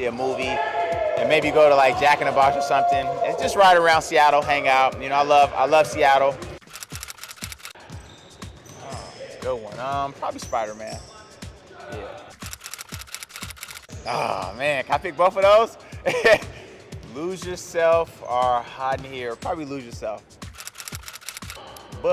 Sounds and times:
Music: 0:00.0 - 0:22.1.

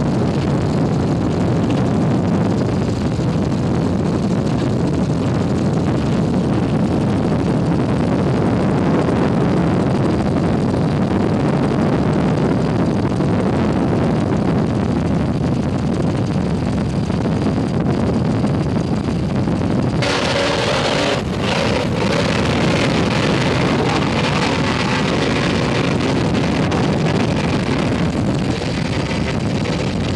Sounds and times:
Motorboat, speedboat: 0:00.0 - 0:30.1
Wind: 0:00.0 - 0:30.1.

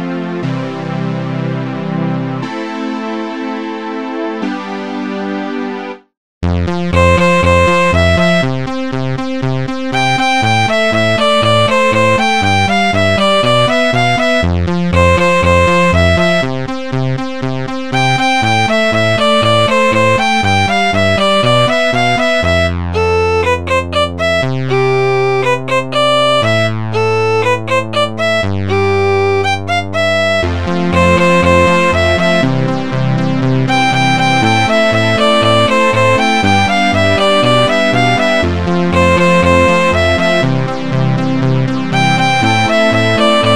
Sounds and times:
Violin, fiddle: 0:33.7 - 0:40.7, 0:41.9 - 0:43.5.

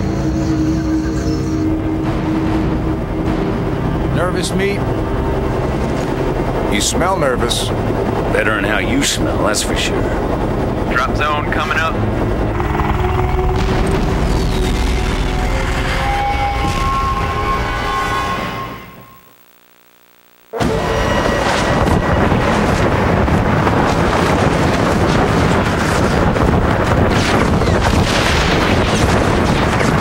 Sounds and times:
Music: 0:00.0 - 0:19.3
Speech: 0:04.2 - 0:04.8, 0:06.7 - 0:10.2, 0:10.9 - 0:12.0.

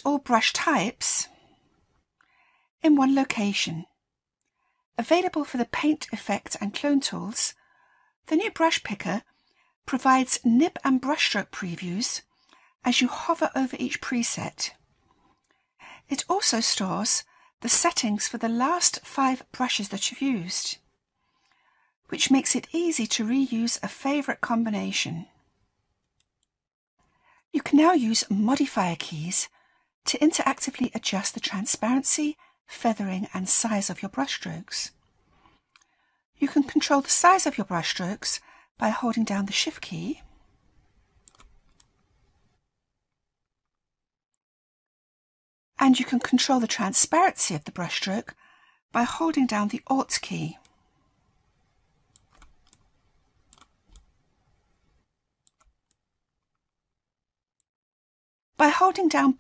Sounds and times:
Speech: 0:00.0 - 0:01.3, 0:02.8 - 0:03.9, 0:05.0 - 0:07.6, 0:08.3 - 0:09.2, 0:09.9 - 0:12.2, 0:12.9 - 0:14.8, 0:16.1 - 0:20.8, 0:22.1 - 0:25.4, 0:27.6 - 0:29.5, 0:30.1 - 0:35.0, 0:36.4 - 0:40.3, 0:45.8 - 0:48.4, 0:49.0 - 0:50.6, 0:58.6 - 0:59.4.

